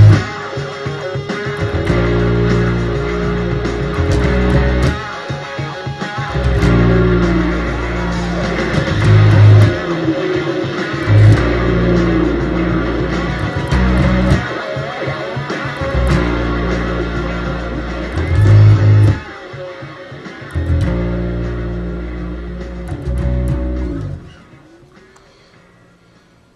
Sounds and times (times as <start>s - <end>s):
Bass guitar: 0.0s - 24.7s.